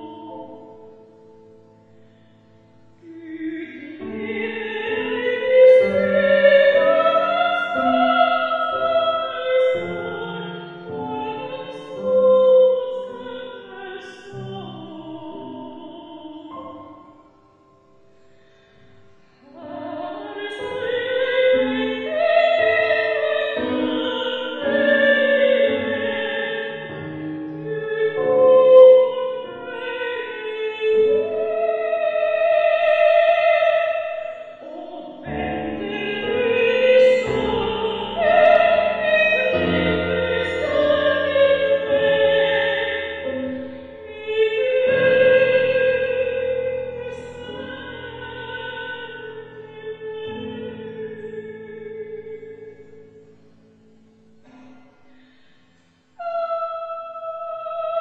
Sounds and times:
Inside, large room or hall: 0.0 - 58.0
Music: 0.0 - 58.0.

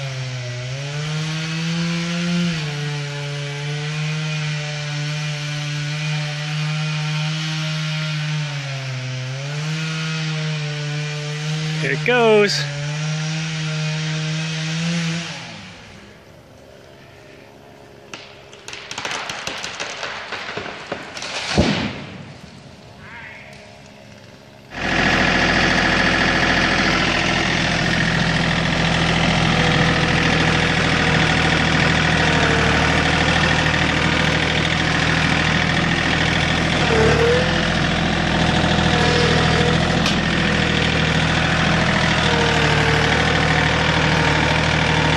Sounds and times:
Power tool: 0.0 - 16.0, 24.7 - 45.1
Chainsaw: 0.0 - 16.4, 24.2 - 45.1
Speech: 11.8 - 12.7.

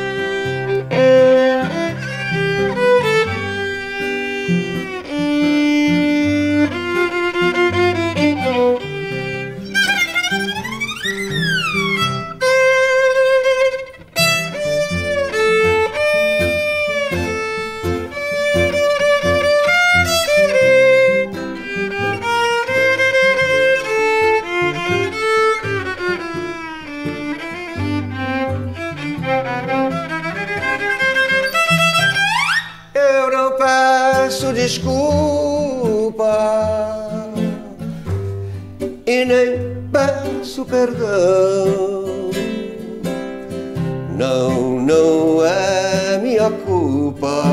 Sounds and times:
String section: 0.0 - 35.6
Violin, fiddle: 0.0 - 38.1.

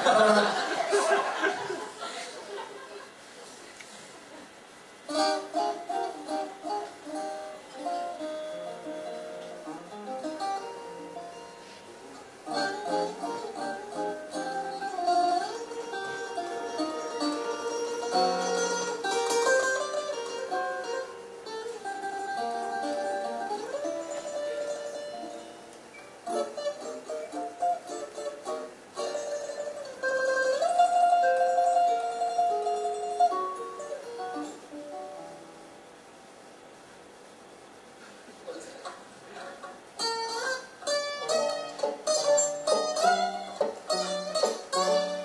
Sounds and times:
Acoustic guitar: 0.0 - 2.5, 3.3 - 45.2
Strum: 4.9 - 36.2, 38.0 - 45.2
Speech: 38.3 - 39.8.

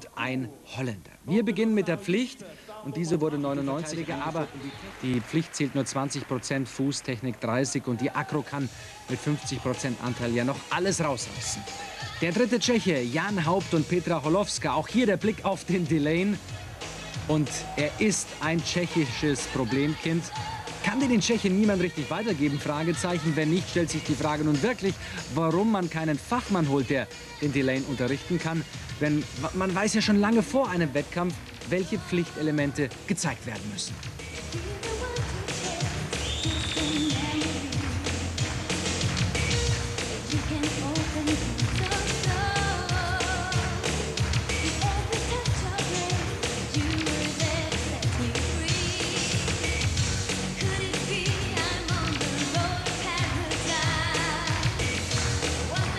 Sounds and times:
Speech: 0.0 - 16.4, 17.3 - 33.9
Rock and roll: 3.0 - 55.9.

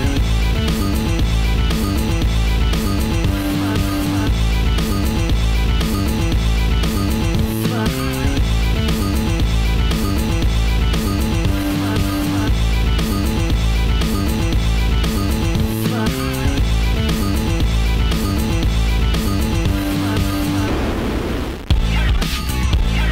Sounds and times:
Music: 0.0 - 23.1.

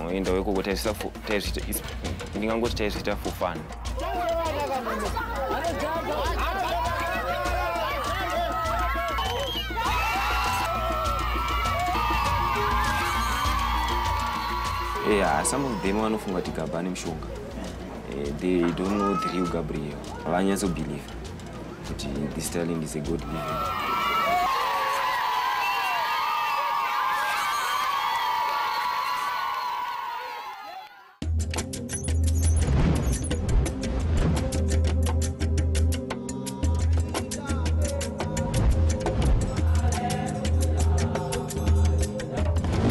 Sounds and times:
Speech: 0.0 - 8.4, 18.1 - 21.1, 21.9 - 23.5
Music: 0.0 - 29.5, 31.2 - 42.9.

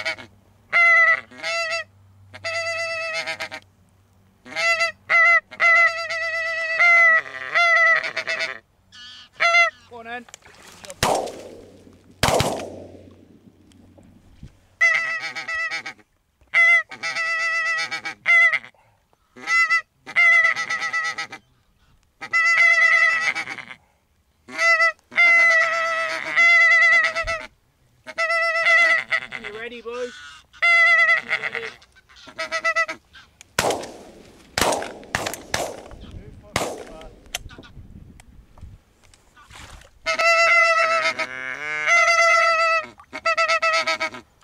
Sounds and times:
Honk: 0.0 - 3.6, 4.4 - 10.0, 14.8 - 18.7, 19.3 - 23.8, 24.5 - 33.4, 39.4 - 44.4.

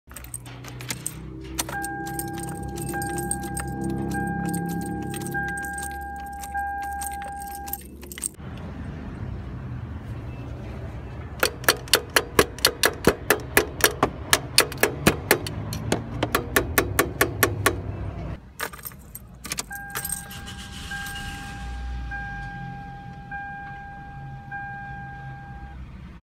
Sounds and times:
Car: 0.1 - 26.2.

